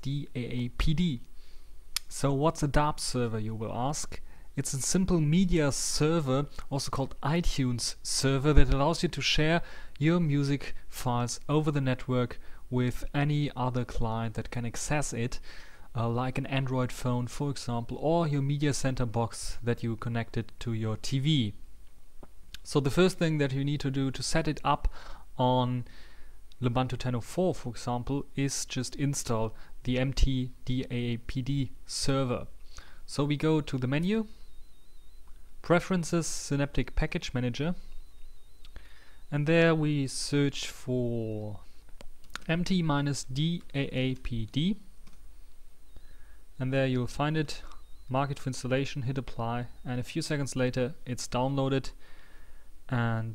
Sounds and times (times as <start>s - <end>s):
Speech: 0.0s - 1.3s, 2.0s - 15.4s, 16.0s - 21.6s, 22.6s - 25.9s, 26.6s - 32.5s, 33.1s - 34.4s, 35.6s - 37.8s, 39.3s - 41.7s, 42.4s - 44.9s, 46.6s - 52.0s, 52.9s - 53.3s.